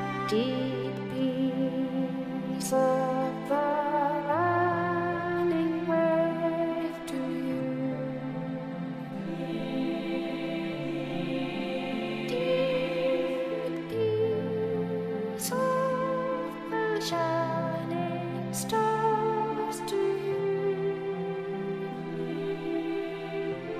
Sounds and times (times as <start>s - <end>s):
Music: 0.0s - 23.7s.